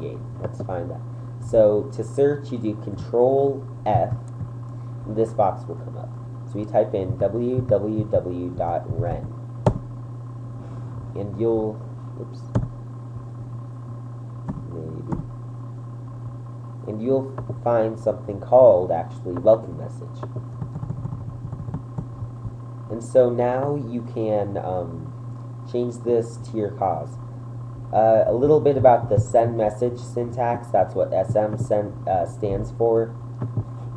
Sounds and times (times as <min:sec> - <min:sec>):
Speech: 0:00.0 - 0:04.2, 0:05.1 - 0:09.4, 0:11.2 - 0:12.5, 0:14.7 - 0:15.2, 0:16.9 - 0:20.3, 0:22.9 - 0:25.1, 0:25.7 - 0:27.2, 0:27.9 - 0:33.2.